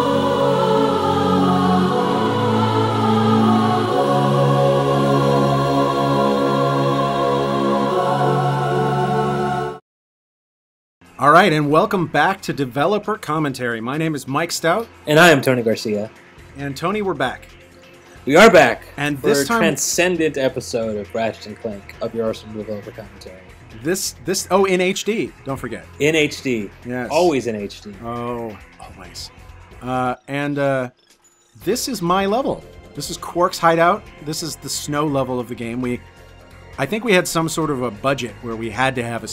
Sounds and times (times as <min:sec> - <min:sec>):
Music: 0:00.0 - 0:09.8, 0:11.0 - 0:39.3
Speech: 0:11.2 - 0:17.5, 0:18.3 - 0:30.9, 0:31.6 - 0:36.0, 0:36.8 - 0:39.3.